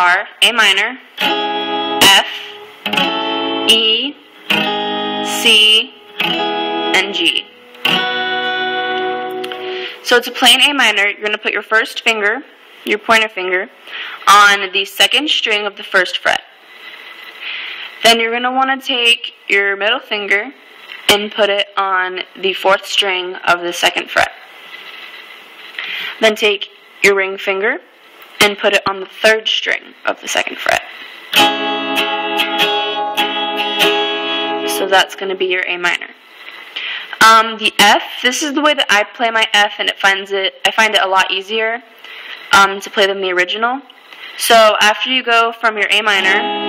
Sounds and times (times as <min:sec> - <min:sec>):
Speech: 0:00.0 - 0:01.1, 0:02.0 - 0:02.5, 0:03.7 - 0:04.2, 0:05.3 - 0:05.9, 0:07.0 - 0:07.5, 0:10.0 - 0:16.5, 0:18.0 - 0:24.5, 0:26.2 - 0:31.0, 0:34.7 - 0:36.2, 0:37.2 - 0:41.9, 0:42.5 - 0:46.4
Guitar: 0:01.1 - 0:11.1, 0:31.3 - 0:35.6, 0:45.9 - 0:46.6.